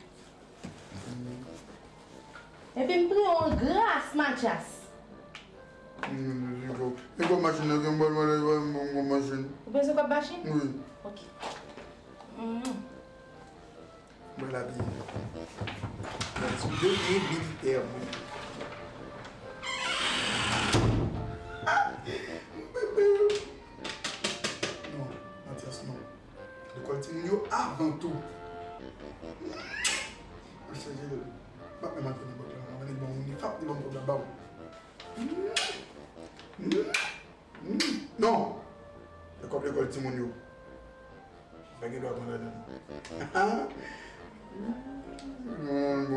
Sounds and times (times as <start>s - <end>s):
Music: 0.0s - 46.1s.